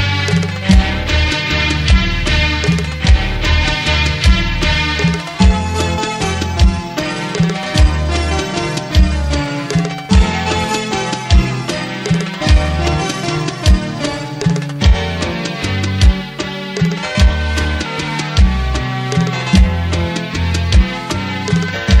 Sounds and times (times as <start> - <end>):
Tender music: 0.0 - 22.0.